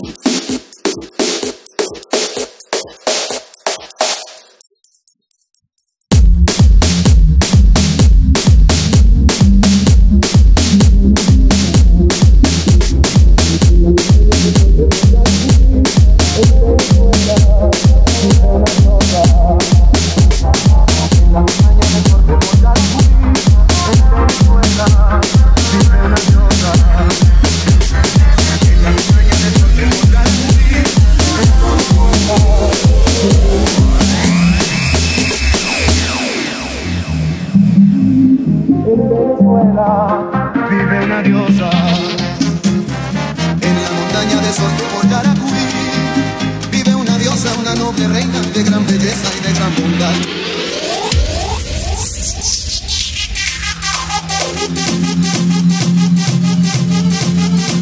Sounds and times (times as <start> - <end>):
Funk: 6.1 - 36.2.